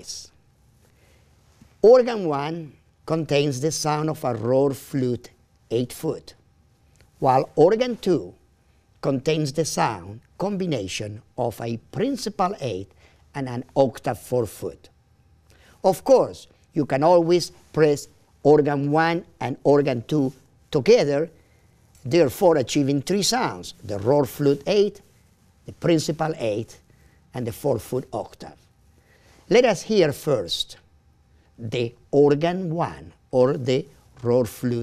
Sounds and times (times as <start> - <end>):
Speech: 0.0 - 0.4, 1.8 - 6.4, 7.2 - 8.4, 9.0 - 14.9, 15.8 - 21.4, 22.0 - 25.0, 25.7 - 28.7, 29.5 - 30.9, 31.6 - 34.8.